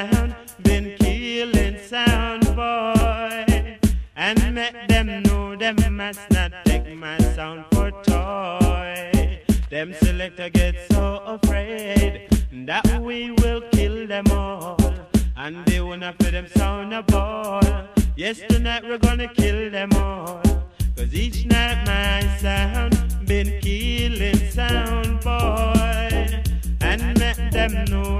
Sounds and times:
Music: 0.0s - 28.1s.

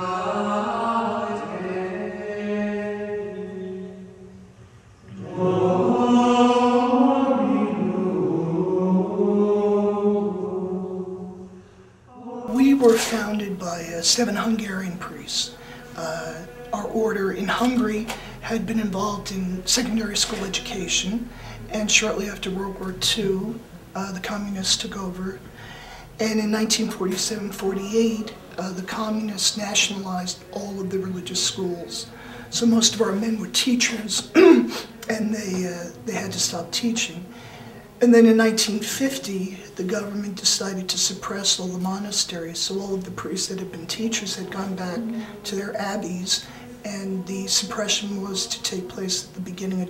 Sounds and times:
Chant: 0.0s - 49.9s
Speech: 12.5s - 25.4s, 26.2s - 37.3s, 38.0s - 49.9s.

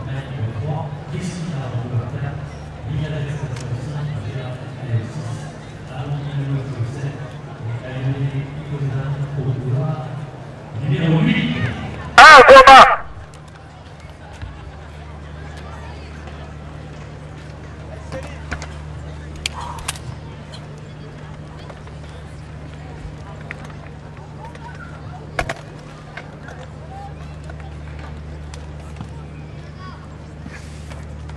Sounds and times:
Outside, urban or manmade: 0.0s - 31.3s.

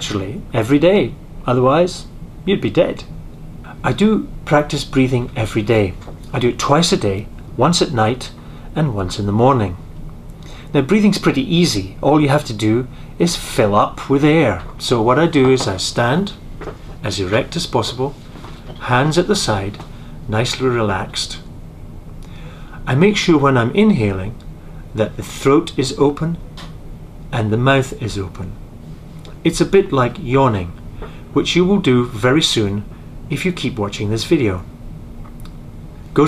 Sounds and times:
Speech: 0.0s - 3.1s, 3.7s - 9.8s, 10.7s - 16.4s, 17.0s - 21.5s, 22.8s - 26.4s, 27.3s - 28.6s, 29.4s - 30.8s, 31.4s - 34.7s.

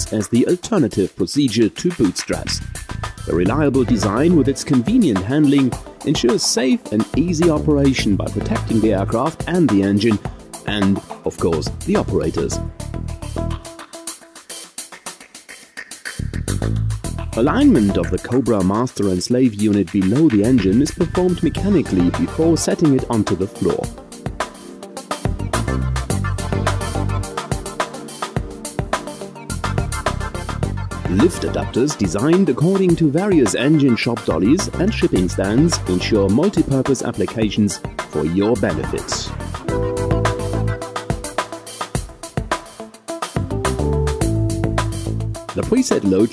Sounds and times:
Speech: 0.0s - 2.7s, 3.3s - 12.6s, 17.4s - 23.9s, 31.1s - 39.4s, 45.5s - 46.3s
Music: 0.0s - 46.3s.

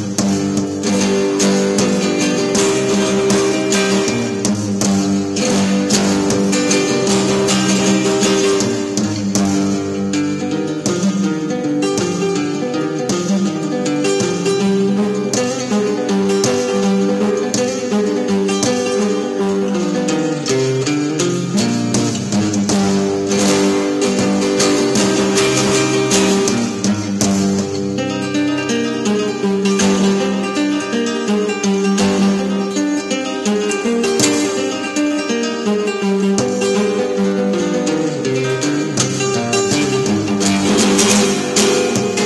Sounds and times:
Guitar: 0.0s - 42.2s
Music of Latin America: 0.0s - 42.2s.

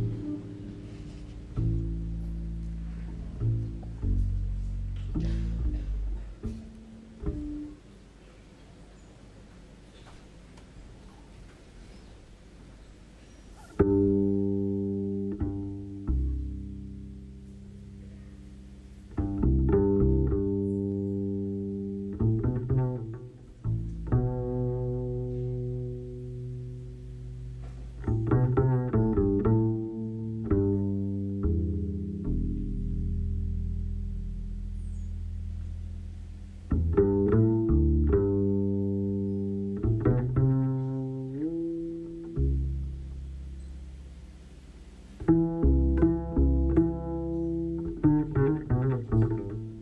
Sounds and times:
Music: 0.0s - 8.0s, 13.6s - 44.2s, 45.1s - 49.8s.

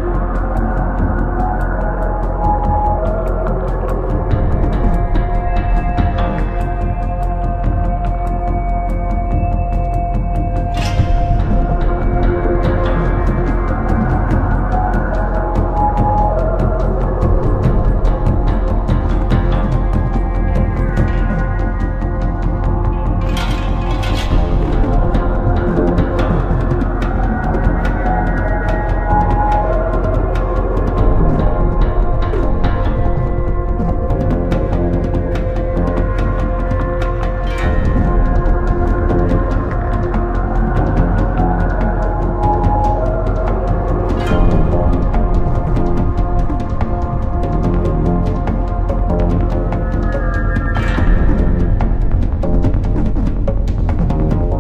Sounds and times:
Soundtrack music: 0.0s - 54.6s.

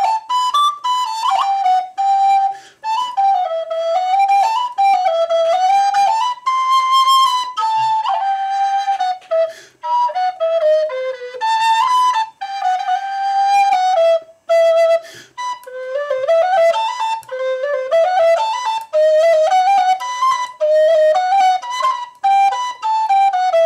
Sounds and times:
Flute: 0.0s - 23.6s.

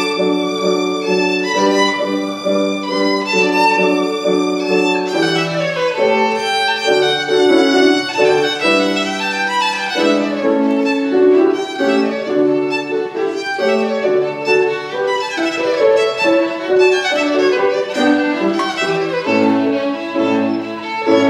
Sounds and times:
Violin, fiddle: 0.0s - 21.3s.

